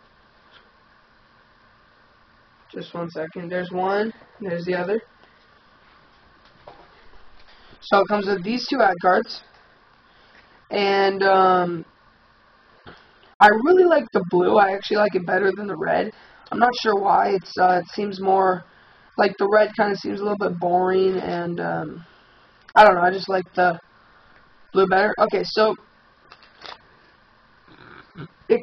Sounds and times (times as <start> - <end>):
Speech: 2.7 - 5.1, 7.8 - 9.5, 10.7 - 11.9, 13.4 - 22.1, 22.8 - 23.8, 24.8 - 25.8.